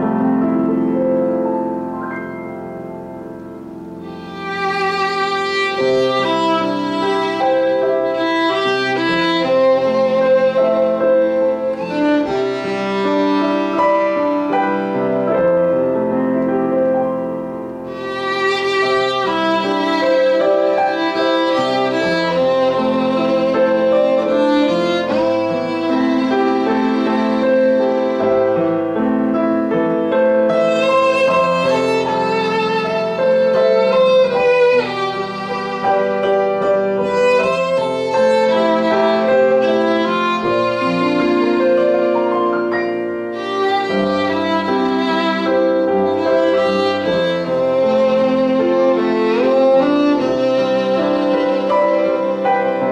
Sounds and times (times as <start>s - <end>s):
Piano: 0.0s - 52.9s
Violin, fiddle: 3.6s - 16.5s, 17.5s - 52.9s.